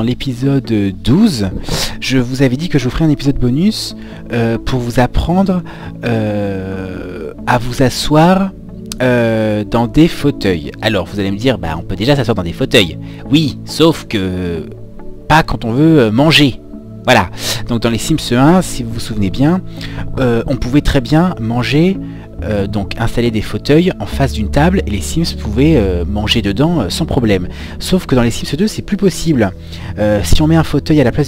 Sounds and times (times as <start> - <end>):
Music: 0.0 - 31.2
Speech: 0.0 - 31.2.